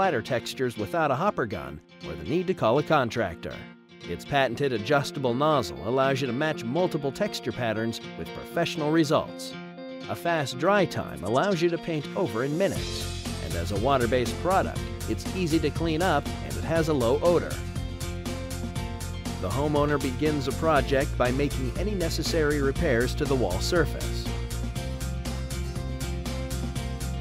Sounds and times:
Speech: 0.0s - 9.5s, 10.1s - 17.6s, 19.4s - 24.3s
Music: 0.0s - 27.2s.

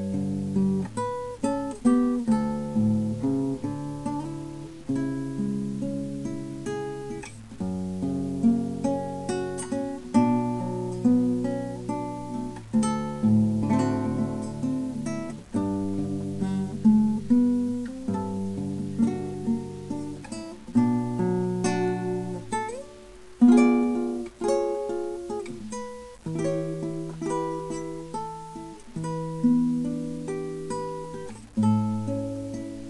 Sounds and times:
Acoustic guitar: 0.0s - 32.9s.

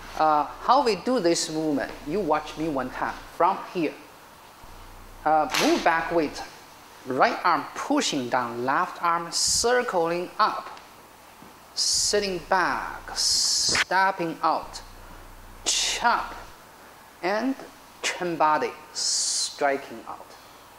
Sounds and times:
Speech: 0.2s - 4.1s, 5.2s - 10.8s, 11.8s - 15.0s, 15.6s - 16.6s, 17.2s - 20.4s.

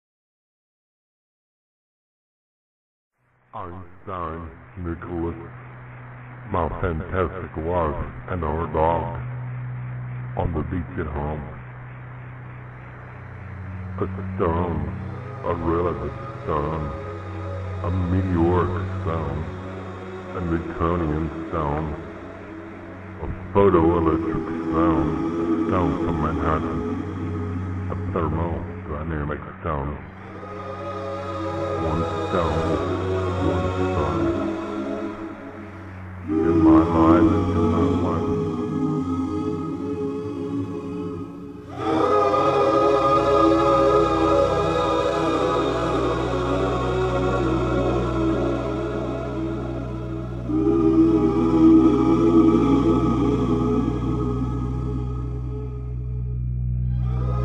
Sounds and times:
Music: 3.2s - 57.4s
Speech: 3.6s - 5.6s, 6.5s - 9.2s, 10.4s - 11.6s, 14.0s - 17.0s, 17.8s - 19.6s, 20.3s - 22.1s, 23.2s - 27.0s, 27.9s - 30.1s, 31.8s - 34.5s, 36.3s - 38.6s.

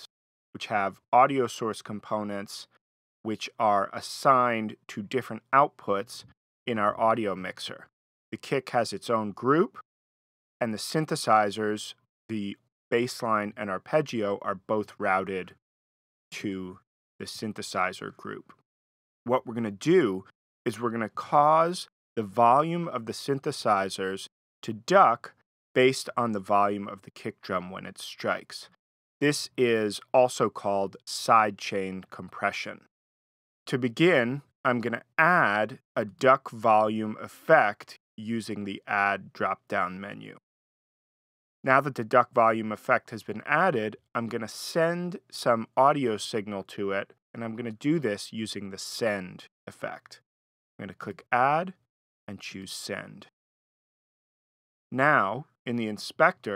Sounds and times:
Speech: 0.0s - 9.8s, 10.6s - 15.6s, 16.3s - 18.6s, 19.3s - 32.9s, 33.7s - 40.4s, 41.7s - 50.2s, 50.8s - 53.3s, 55.0s - 56.5s.

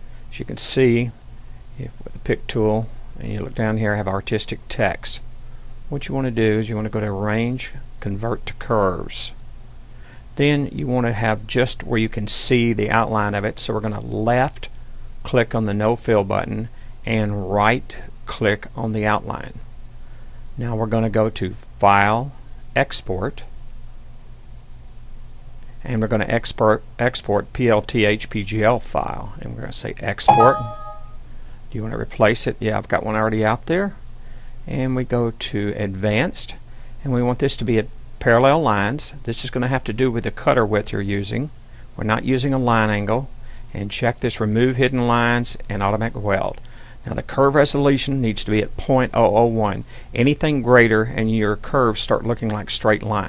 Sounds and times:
Speech: 0.3s - 1.2s, 1.8s - 5.3s, 5.9s - 9.4s, 10.4s - 19.6s, 20.6s - 23.5s, 25.8s - 31.0s, 31.7s - 34.0s, 34.7s - 53.2s.

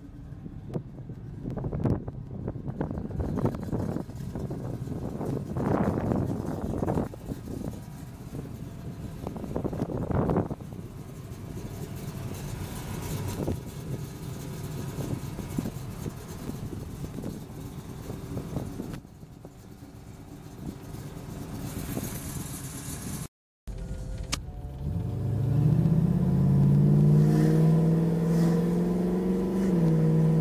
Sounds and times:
Idling: 0.0s - 25.3s
Car: 0.0s - 30.4s
Medium engine (mid frequency): 0.0s - 30.4s.

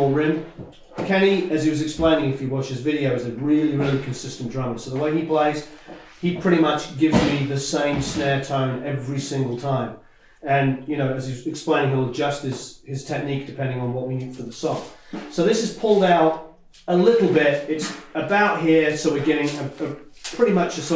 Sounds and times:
Speech: 0.0s - 20.9s.

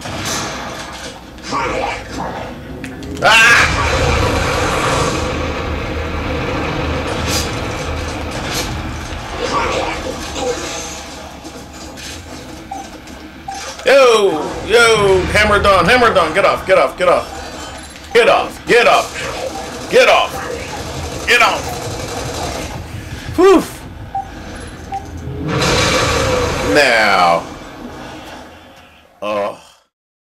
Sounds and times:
Speech: 13.8s - 17.3s, 18.1s - 20.7s, 26.7s - 27.5s.

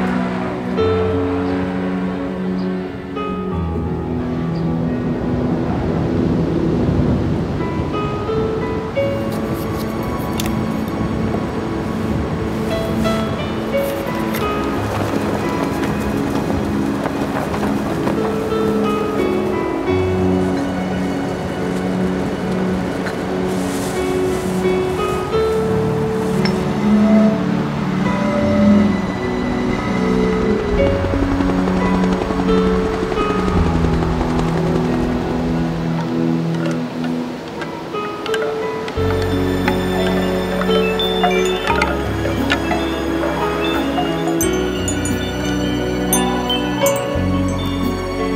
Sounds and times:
Music: 0.0s - 48.3s
Wind noise (microphone): 5.1s - 26.9s.

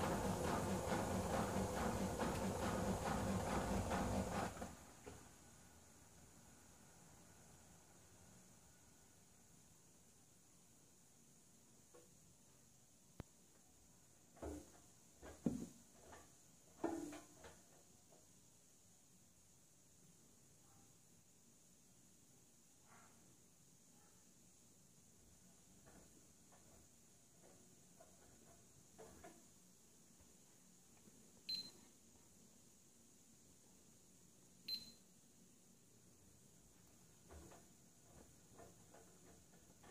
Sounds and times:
Beep, bleep: 31.5s - 31.8s, 34.7s - 35.1s.

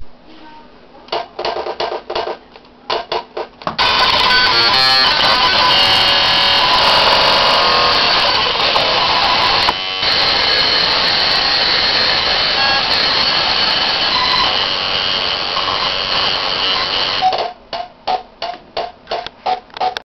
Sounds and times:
Mains hum: 0.0s - 20.0s
Hum: 3.8s - 17.4s.

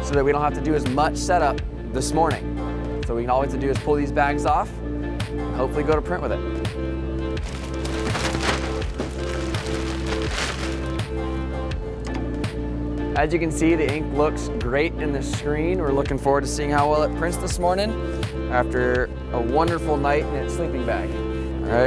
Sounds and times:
Speech: 0.0s - 2.4s, 3.1s - 4.7s, 13.2s - 17.9s, 18.5s - 21.8s
Music: 0.0s - 21.8s.

